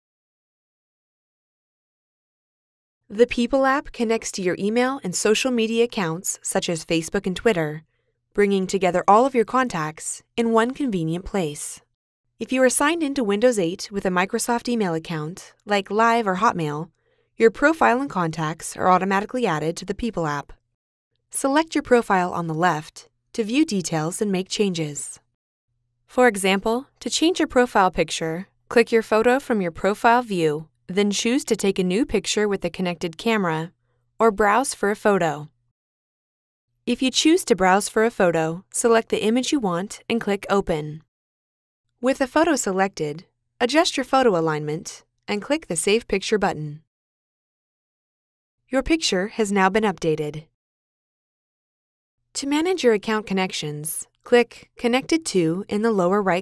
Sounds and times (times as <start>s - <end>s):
Speech: 3.1s - 7.8s, 8.4s - 20.6s, 21.4s - 25.2s, 26.1s - 35.5s, 36.9s - 41.1s, 42.0s - 46.8s, 48.7s - 50.5s, 52.4s - 56.4s.